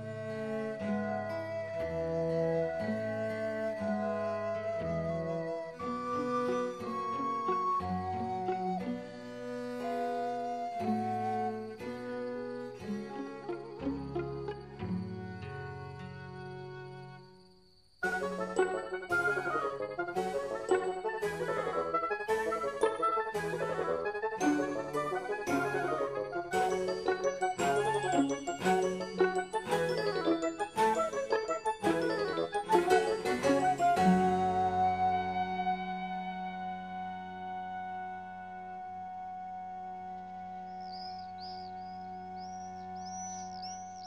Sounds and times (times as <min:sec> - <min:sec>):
Music: 0:00.0 - 0:44.0.